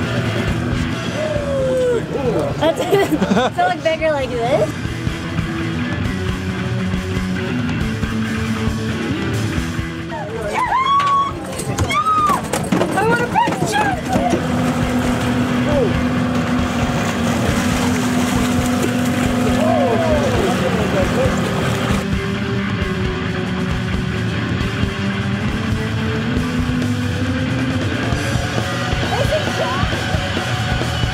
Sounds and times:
Motorboat, speedboat: 0.0s - 31.1s
Waves, surf: 16.7s - 22.0s.

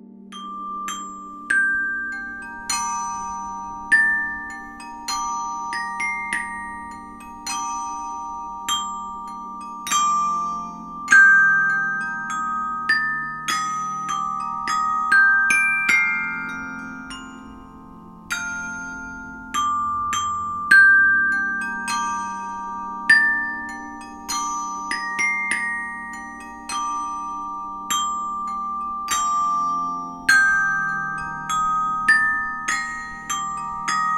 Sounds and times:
Glockenspiel: 0.0s - 34.1s.

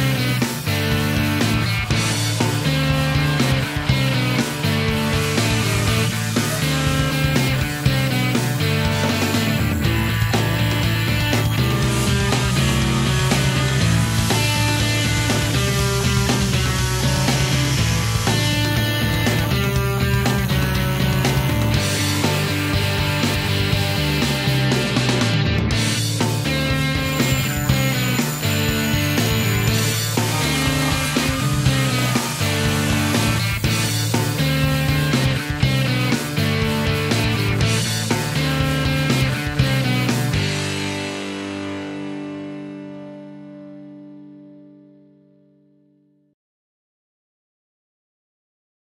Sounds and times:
Music: 0.0s - 46.4s.

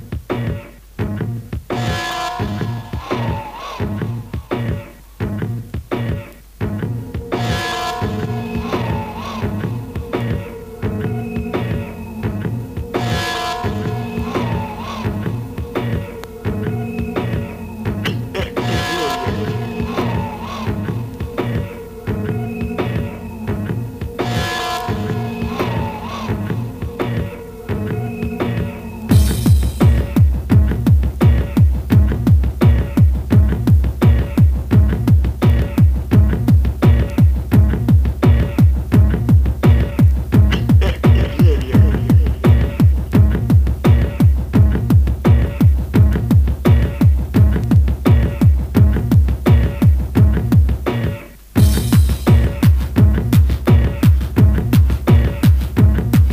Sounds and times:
Music: 0.0s - 56.3s
Speech: 18.1s - 19.6s, 40.5s - 42.3s.

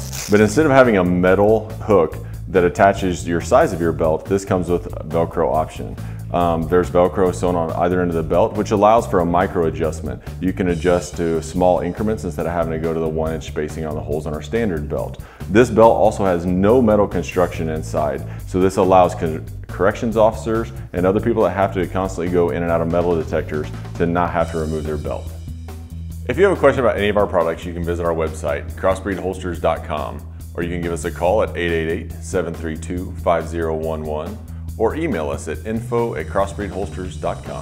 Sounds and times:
Music: 0.0s - 37.6s
Speech: 0.3s - 25.4s, 26.3s - 37.6s.

